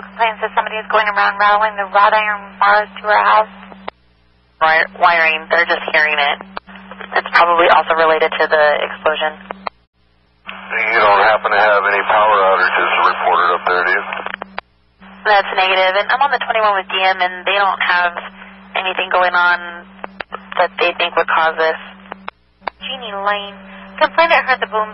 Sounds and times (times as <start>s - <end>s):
Speech: 0.0s - 3.5s, 4.6s - 9.4s, 10.7s - 14.3s, 15.3s - 19.8s, 20.4s - 21.9s, 22.8s - 24.9s.